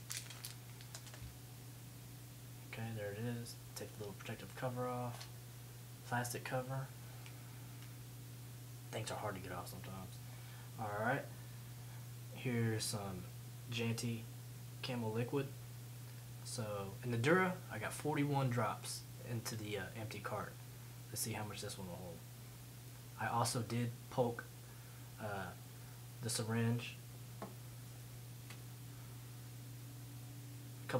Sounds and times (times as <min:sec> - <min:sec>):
Speech: 0:02.7 - 0:05.3, 0:06.0 - 0:06.9, 0:08.9 - 0:10.2, 0:10.8 - 0:11.3, 0:12.4 - 0:15.6, 0:16.4 - 0:22.2, 0:23.2 - 0:24.5, 0:25.2 - 0:25.6, 0:26.2 - 0:27.0.